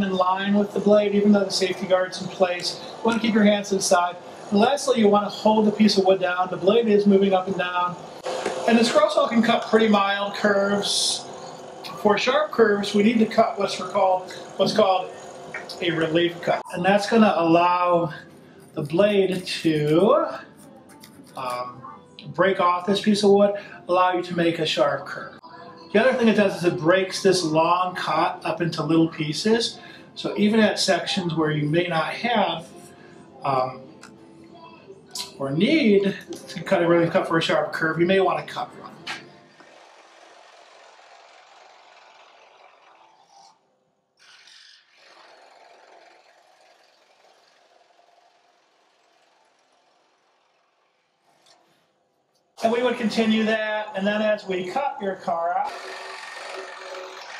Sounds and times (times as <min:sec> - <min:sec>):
Sawing: 0:00.0 - 0:21.6, 0:38.5 - 0:43.6, 0:44.2 - 0:51.7, 0:55.6 - 0:57.3.